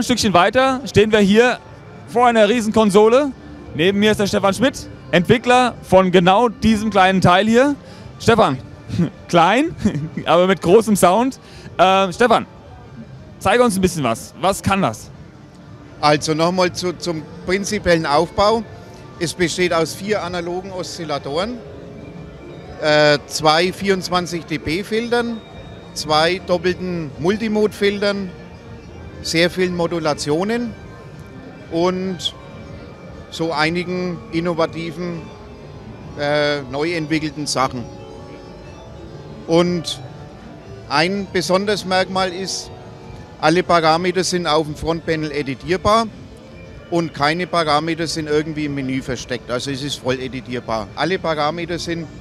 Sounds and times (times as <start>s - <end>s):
Speech: 0.0s - 12.5s, 13.4s - 15.1s, 16.0s - 18.6s, 19.2s - 21.6s, 22.8s - 25.4s, 26.0s - 28.3s, 29.3s - 30.8s, 31.7s - 32.4s, 33.3s - 35.2s, 36.2s - 37.9s, 39.5s - 40.0s, 40.9s - 42.7s, 43.4s - 46.1s, 46.9s - 52.1s
Music: 0.0s - 52.2s.